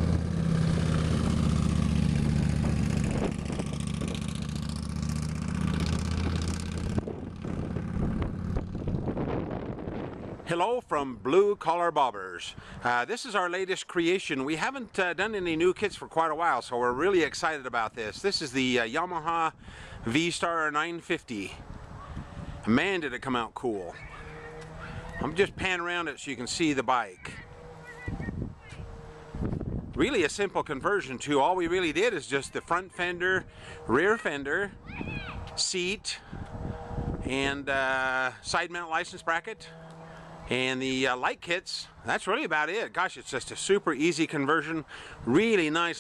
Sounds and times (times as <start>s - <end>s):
Speech: 10.5s - 19.5s, 20.1s - 21.6s, 22.7s - 24.0s, 25.2s - 27.5s, 30.0s - 34.7s, 35.6s - 36.2s, 37.3s - 39.7s, 40.5s - 46.0s.